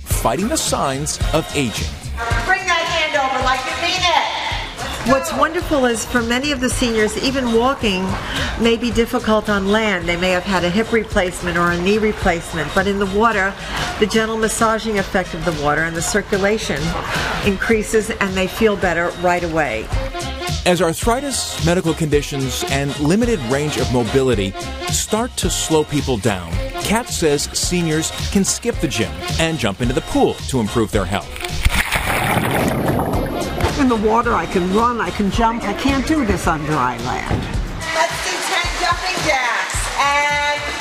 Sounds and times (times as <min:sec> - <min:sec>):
Music: 0:00.0 - 0:40.8
Speech: 0:00.1 - 0:04.4, 0:20.7 - 0:31.3.